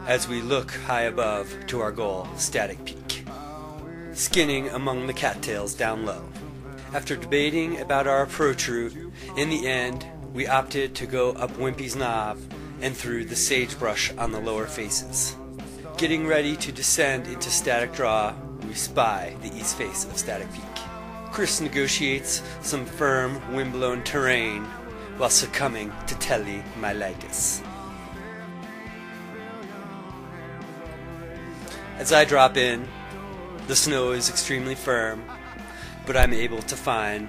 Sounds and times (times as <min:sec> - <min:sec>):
Speech: 0:00.0 - 0:03.4, 0:04.2 - 0:06.3, 0:06.9 - 0:27.7, 0:32.0 - 0:32.9, 0:33.7 - 0:35.4, 0:36.0 - 0:37.2
Music: 0:00.0 - 0:37.2.